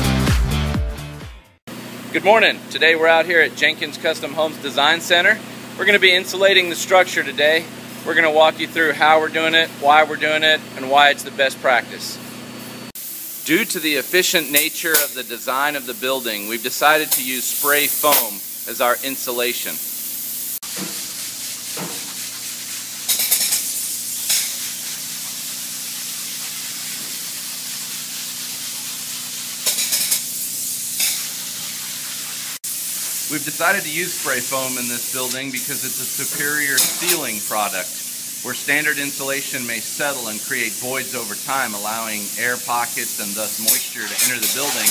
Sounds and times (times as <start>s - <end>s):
Speech: 2.1s - 12.2s, 13.5s - 19.8s, 33.3s - 44.9s
Spray: 12.9s - 44.9s
Gush: 13.0s - 44.9s.